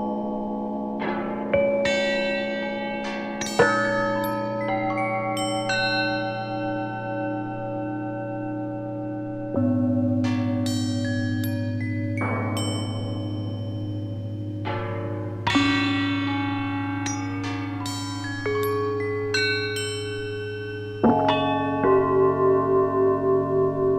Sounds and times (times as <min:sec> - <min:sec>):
Tubular bells: 0:00.0 - 0:23.9.